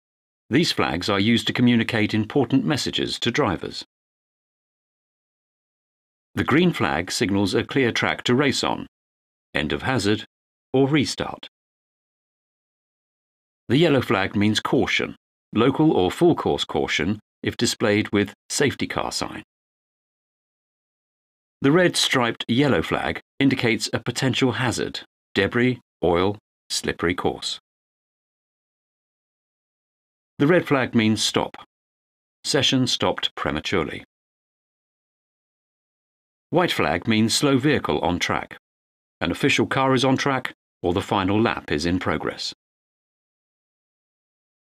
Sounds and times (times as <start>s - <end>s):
Narration, monologue: 0.5s - 3.9s, 6.4s - 9.0s, 9.6s - 11.5s, 13.7s - 19.5s, 21.6s - 27.6s, 30.4s - 31.7s, 32.4s - 34.1s, 36.5s - 38.6s, 39.2s - 42.6s.